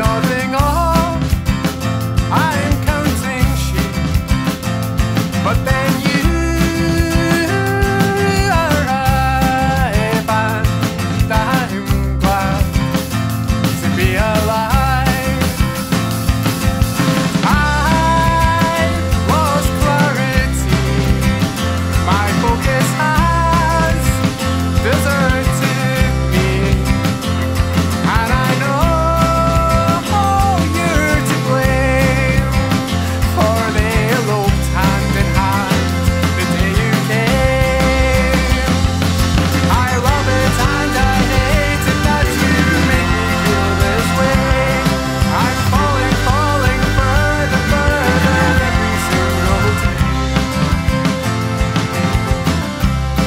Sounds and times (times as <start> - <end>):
Music: 0.0 - 53.2.